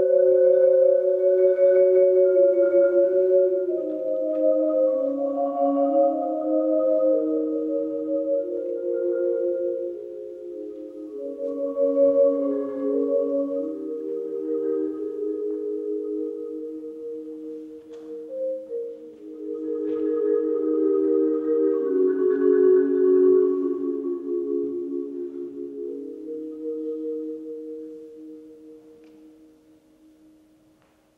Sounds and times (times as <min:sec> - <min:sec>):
Marimba, xylophone: 0:00.0 - 0:30.6.